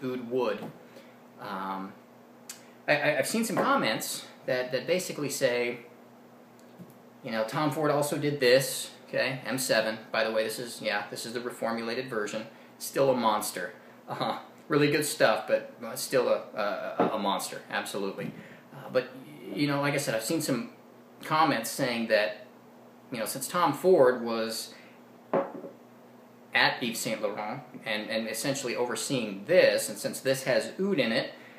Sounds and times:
Speech: 0.0s - 0.7s, 1.4s - 2.0s, 2.9s - 5.9s, 7.2s - 22.5s, 23.1s - 24.7s, 26.6s - 31.4s.

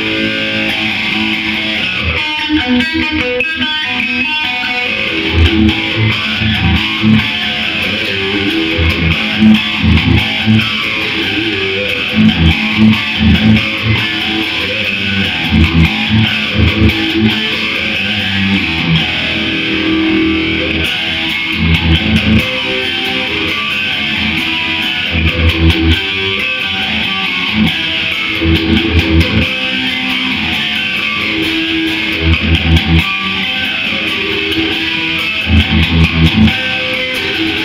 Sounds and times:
Bass guitar: 0.0s - 37.6s.

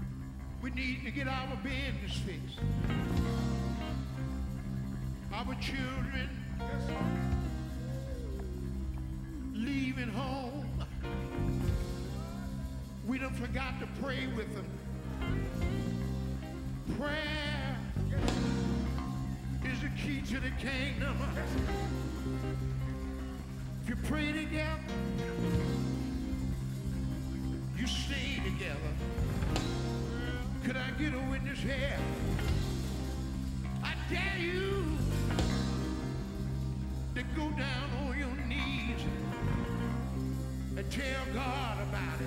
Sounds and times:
Music: 0.0s - 42.2s.

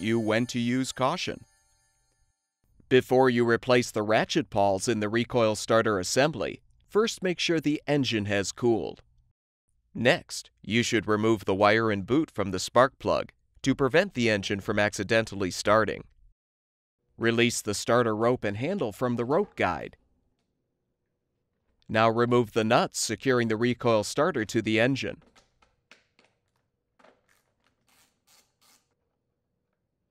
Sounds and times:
Speech: 0.0s - 1.4s, 2.9s - 9.0s, 10.0s - 16.1s, 17.2s - 20.0s, 21.9s - 25.2s.

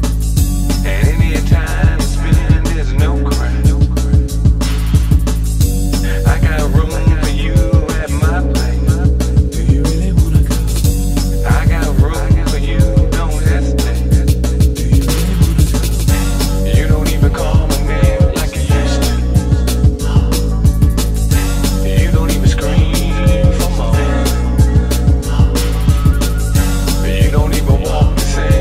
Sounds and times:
Music: 0.0s - 28.6s.

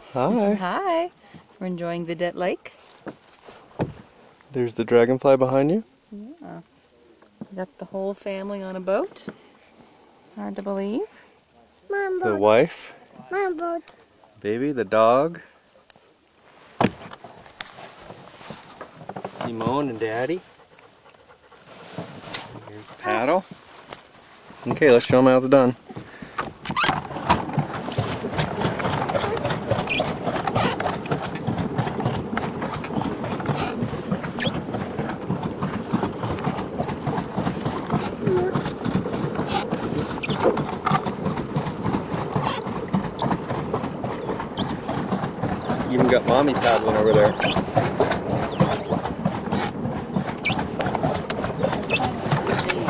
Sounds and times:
Boat, Water vehicle: 0.0s - 52.8s.

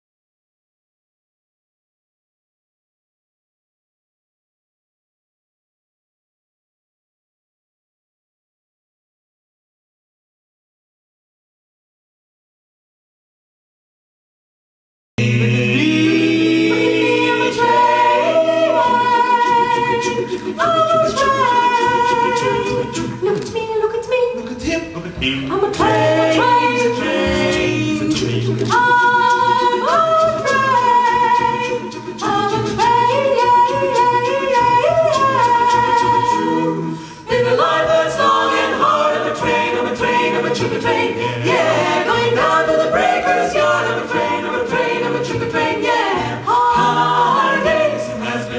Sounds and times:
Christmas music: 15.2s - 23.5s, 24.7s - 48.5s.

